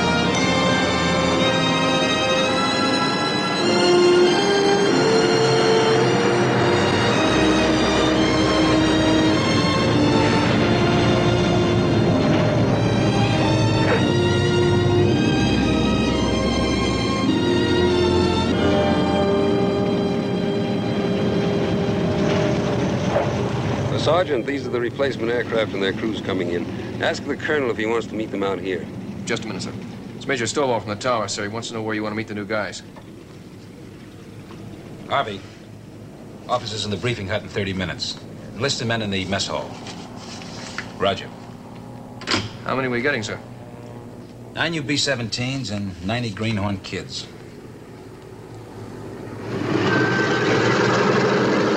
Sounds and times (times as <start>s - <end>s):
Music: 0.0s - 28.0s
Speech: 23.9s - 32.9s, 35.1s - 35.5s, 36.5s - 39.8s, 41.0s - 41.4s, 42.6s - 43.4s, 44.6s - 47.4s.